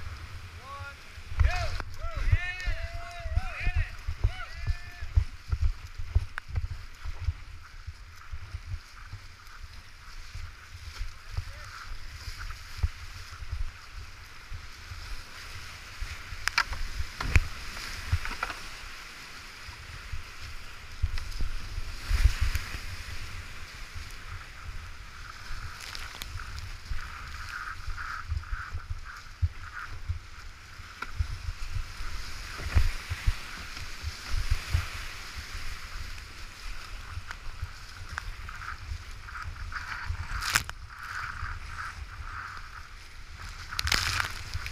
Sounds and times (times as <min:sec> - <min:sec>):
Rowboat, canoe, kayak: 0:00.0 - 0:44.7.